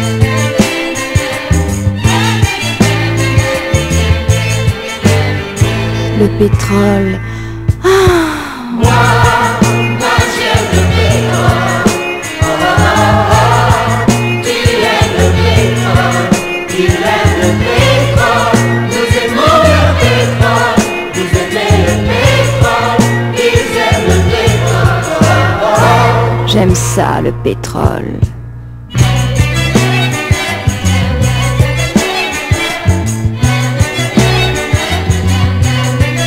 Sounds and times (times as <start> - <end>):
Music: 0.0 - 36.2.